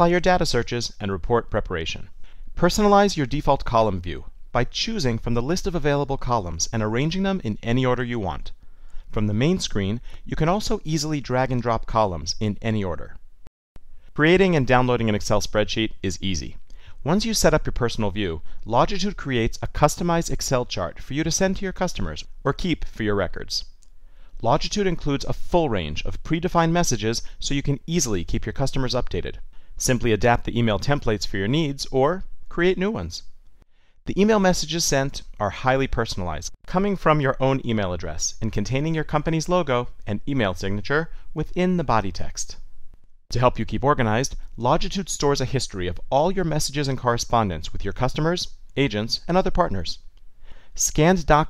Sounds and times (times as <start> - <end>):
Speech: 0.0 - 13.2, 14.2 - 23.7, 24.4 - 33.3, 34.1 - 42.7, 43.3 - 50.0, 50.8 - 51.4.